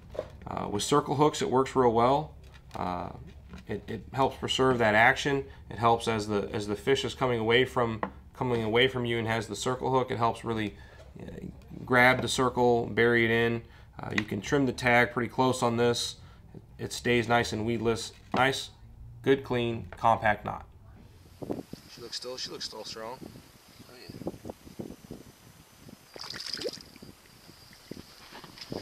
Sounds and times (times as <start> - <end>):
Speech: 0.5 - 16.2, 16.8 - 20.7, 21.9 - 23.2, 23.9 - 24.2.